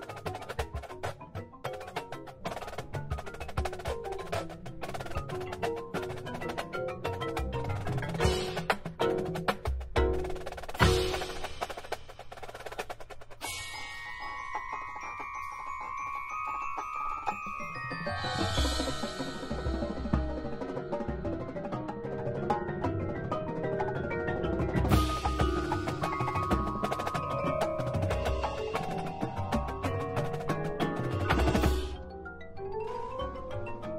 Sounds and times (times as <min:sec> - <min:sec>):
Drum: 0:00.0 - 0:15.5, 0:18.0 - 0:22.0, 0:24.0 - 0:32.0.